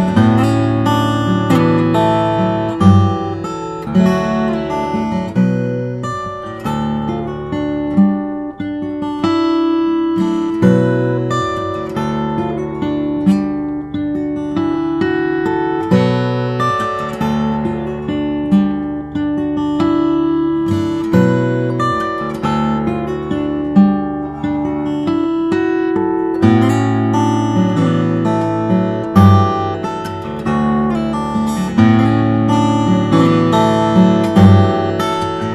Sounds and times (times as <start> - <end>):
Acoustic guitar: 0.0 - 35.5
Strum: 19.8 - 35.5.